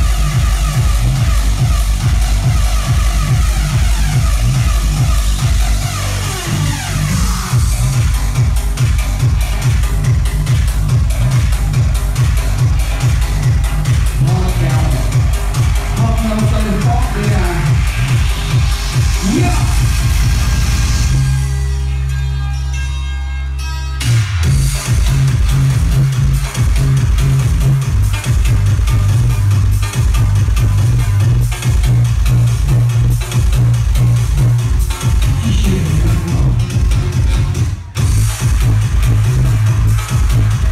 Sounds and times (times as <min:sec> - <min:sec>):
Music: 0:00.0 - 0:40.7.